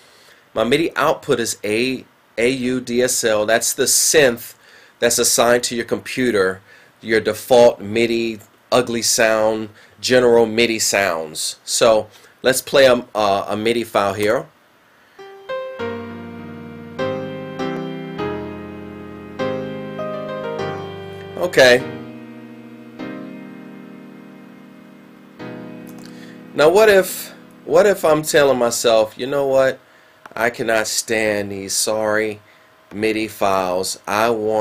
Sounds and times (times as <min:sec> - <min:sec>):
Speech: 0:00.6 - 0:14.5, 0:21.4 - 0:21.9, 0:26.6 - 0:29.8, 0:30.4 - 0:34.6
Music: 0:15.2 - 0:28.7.